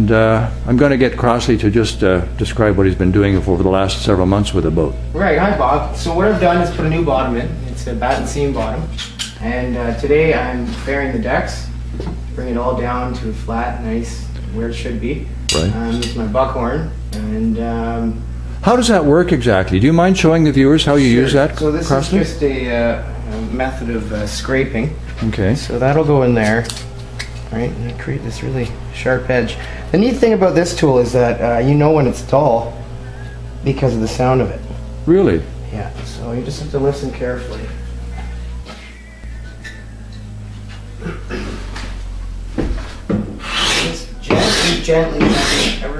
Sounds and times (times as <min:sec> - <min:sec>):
Speech: 0:00.0 - 0:26.7, 0:27.5 - 0:32.8, 0:33.6 - 0:37.8, 0:43.6 - 0:45.9.